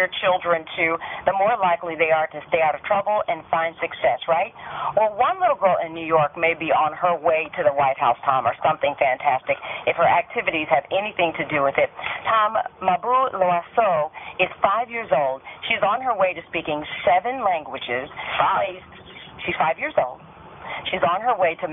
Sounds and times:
Speech: 0:00.0 - 0:21.7.

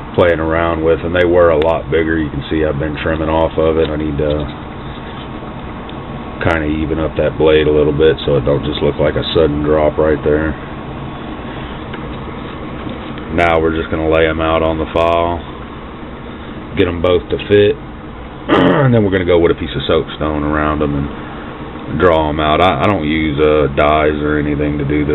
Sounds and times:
Speech: 0:00.1 - 0:04.5, 0:06.4 - 0:10.6, 0:13.3 - 0:15.5, 0:16.8 - 0:17.8, 0:18.5 - 0:21.1, 0:21.9 - 0:25.1.

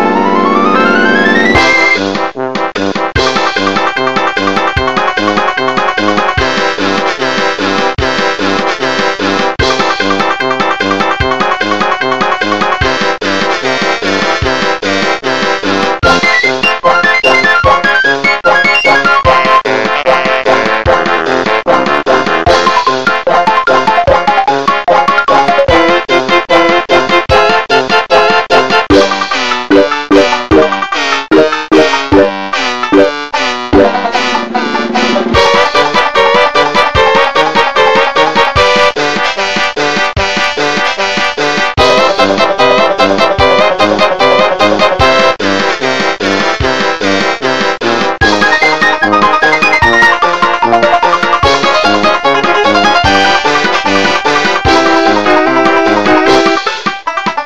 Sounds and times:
Funny music: 0:00.0 - 0:57.4.

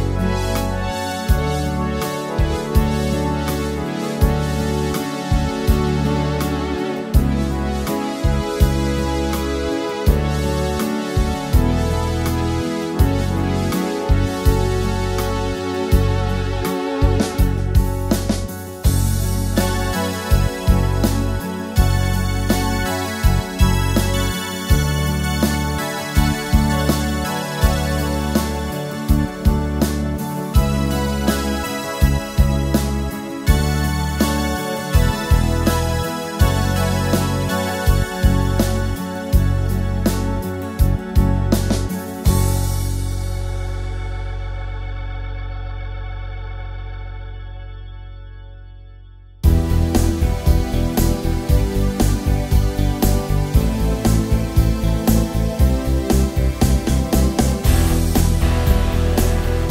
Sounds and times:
Music: 0:00.0 - 0:59.7.

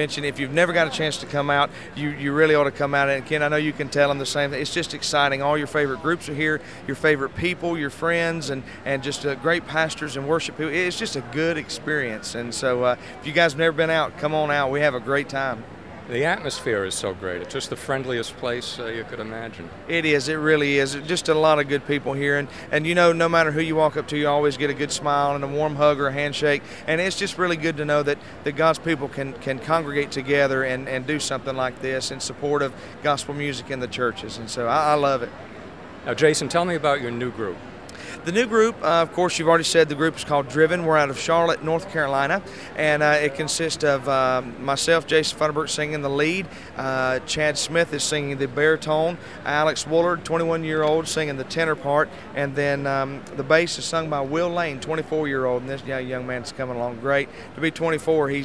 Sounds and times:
Speech: 0:00.0 - 0:35.3, 0:38.2 - 0:58.4.

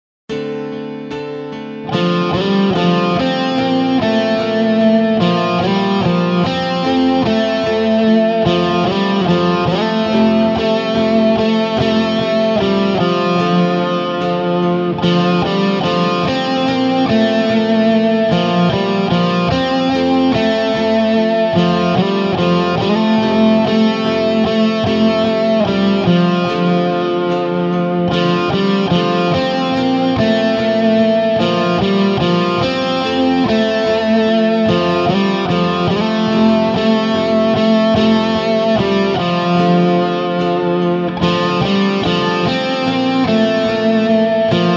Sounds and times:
Electric guitar: 0:00.3 - 0:44.7
Tapping (guitar technique): 0:00.3 - 0:44.7.

